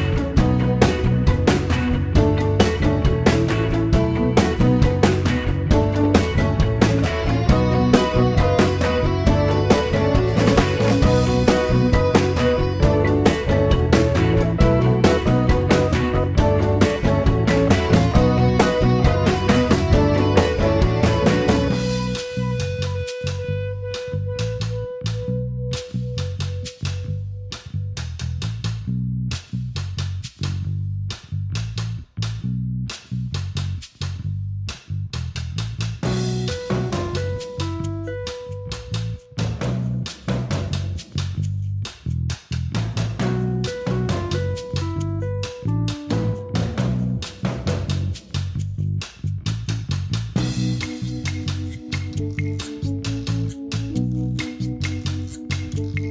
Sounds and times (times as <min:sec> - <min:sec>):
Blues: 0:00.0 - 0:56.1.